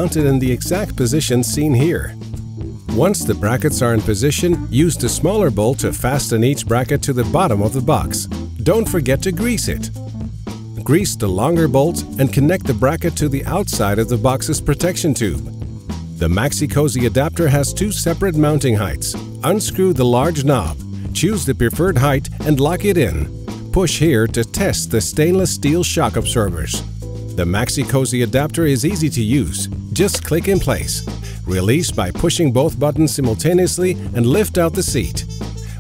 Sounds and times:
Speech: 0.0s - 2.2s, 2.9s - 9.9s, 10.8s - 15.5s, 16.2s - 26.8s, 27.4s - 35.3s
Music: 0.0s - 35.8s.

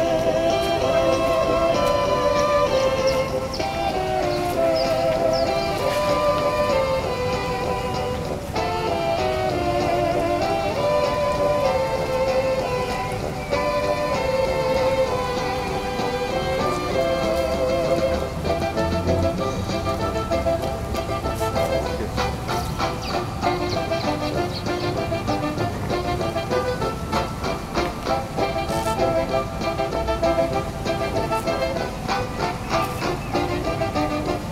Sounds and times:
Music: 0.0s - 34.5s.

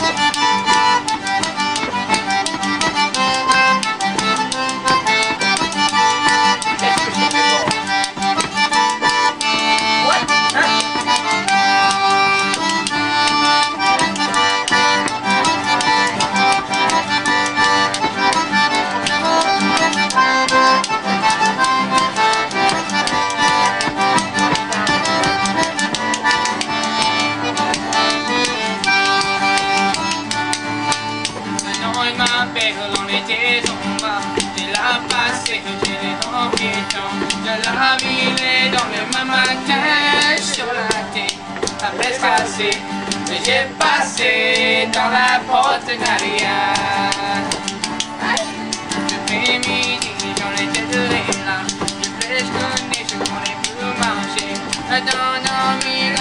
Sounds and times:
Music: 0.0s - 56.2s
Tap: 0.1s - 11.3s, 11.9s - 18.4s, 19.0s - 43.3s, 46.0s - 56.2s.

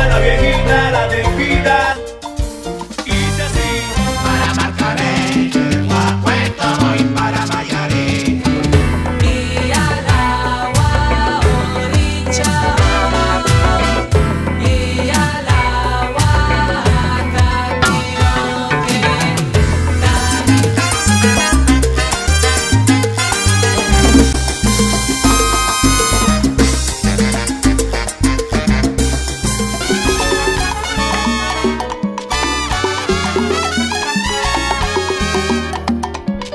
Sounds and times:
Salsa music: 0.0s - 36.5s.

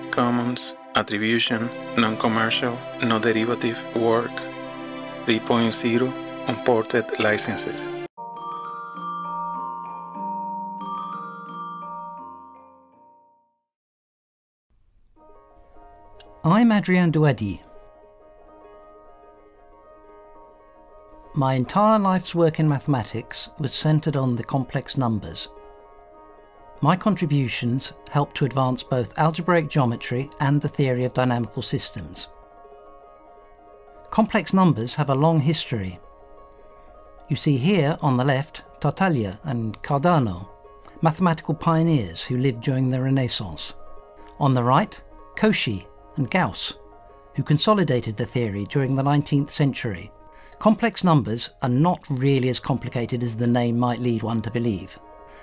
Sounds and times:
Glockenspiel: 6.6s - 13.6s
Marimba, xylophone: 7.0s - 13.2s.

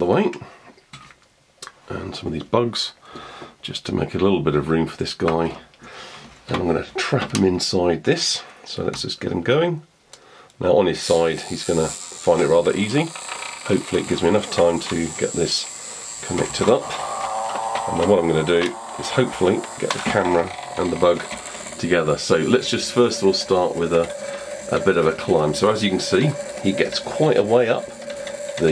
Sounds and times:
Speech: 0.0s - 0.5s, 1.9s - 3.0s, 3.6s - 5.7s, 6.5s - 9.9s, 10.6s - 17.0s, 17.9s - 27.9s
Inside, small room: 0.0s - 28.7s.

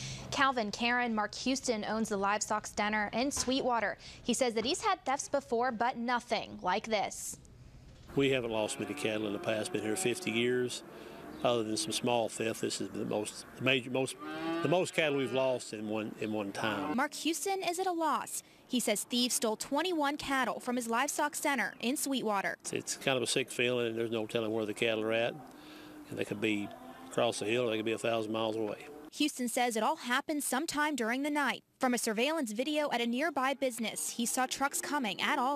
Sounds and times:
Speech: 0.3s - 7.4s, 8.1s - 10.8s, 11.5s - 25.4s, 26.1s - 35.5s.

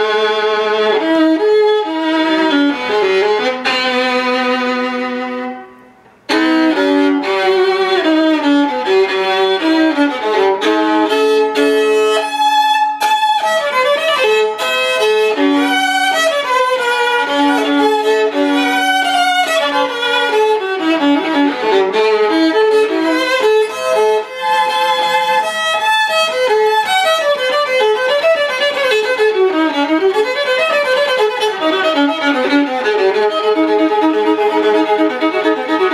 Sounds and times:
Violin, fiddle: 0.0s - 35.9s.

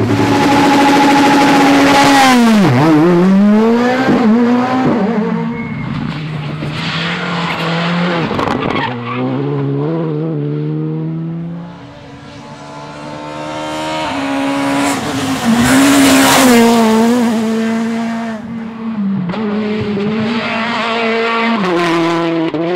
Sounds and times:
Race car, auto racing: 0.0s - 22.7s
Tire squeal: 5.3s - 7.8s, 8.4s - 9.4s.

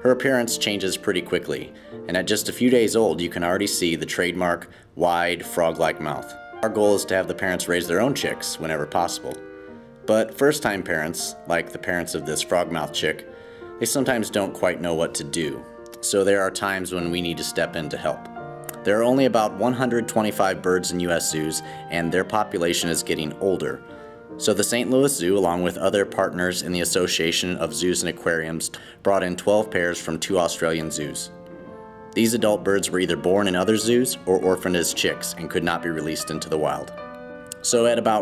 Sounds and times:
Speech: 0.0s - 9.4s, 10.1s - 13.2s, 13.8s - 23.8s, 24.4s - 31.4s, 32.2s - 37.0s, 37.6s - 38.2s
Music: 0.0s - 38.2s.

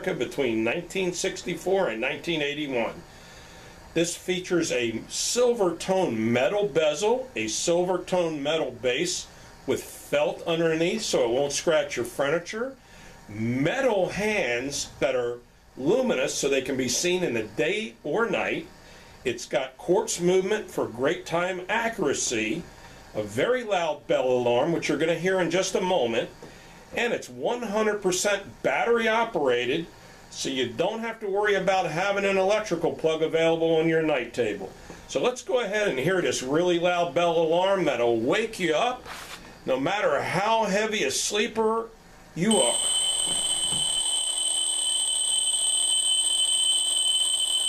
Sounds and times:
Speech: 0.0s - 3.1s, 3.9s - 42.9s.

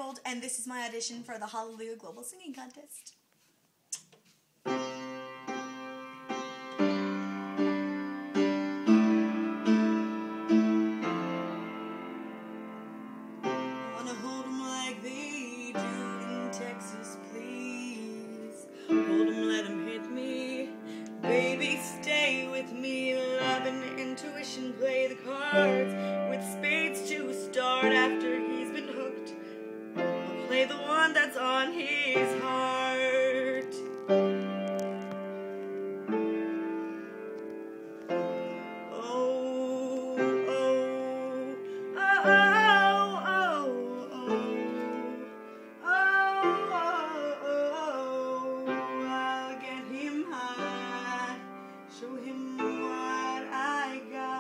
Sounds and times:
Music: 4.6s - 54.4s
Female singing: 14.0s - 29.4s, 30.4s - 33.9s, 39.0s - 54.4s.

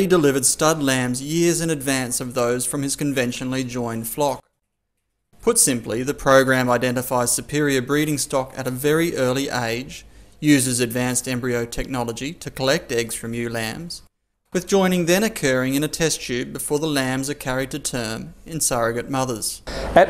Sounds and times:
Speech: 0.0s - 4.4s, 5.4s - 20.0s.

